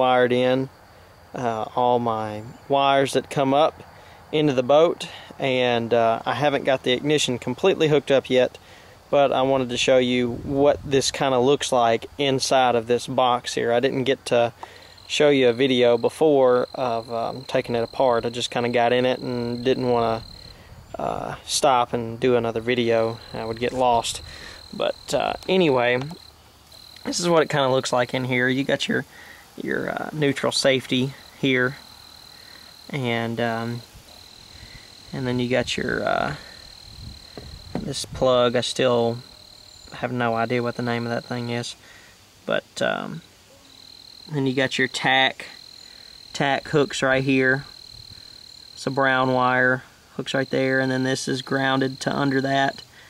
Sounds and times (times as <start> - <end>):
Speech: 0.0 - 0.7, 1.4 - 3.8, 4.4 - 20.3, 21.0 - 26.2, 27.0 - 31.8, 32.9 - 33.9, 35.2 - 36.5, 37.8 - 39.3, 40.0 - 41.8, 42.5 - 43.3, 44.3 - 45.6, 46.4 - 47.7, 48.8 - 52.8.